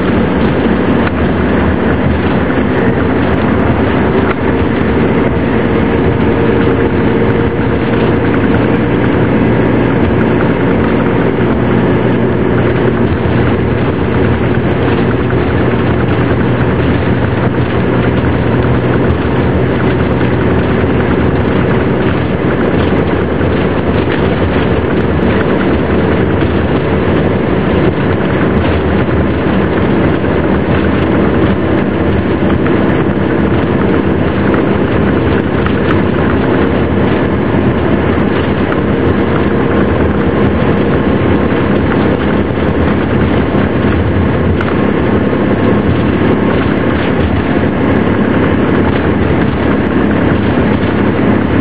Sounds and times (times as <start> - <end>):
Bus: 0.0 - 51.6.